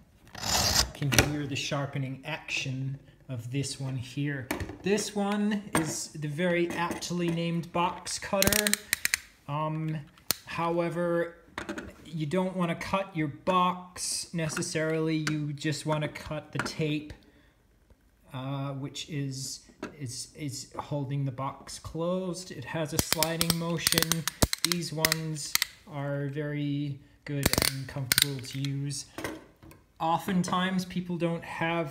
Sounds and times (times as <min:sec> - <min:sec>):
Speech: 0:01.0 - 0:08.8, 0:09.5 - 0:11.4, 0:12.0 - 0:17.2, 0:18.3 - 0:29.1, 0:30.0 - 0:31.9.